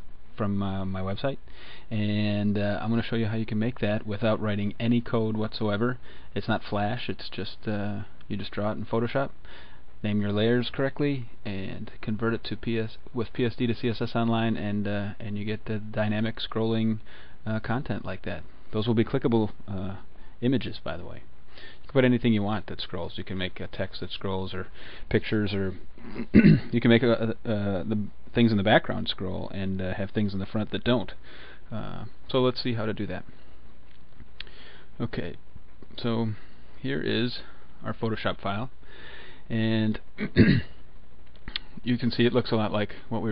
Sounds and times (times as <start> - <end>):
Speech: 0.3 - 9.4, 10.0 - 21.3, 21.9 - 33.3, 35.0 - 38.8, 39.5 - 40.8, 41.8 - 43.3.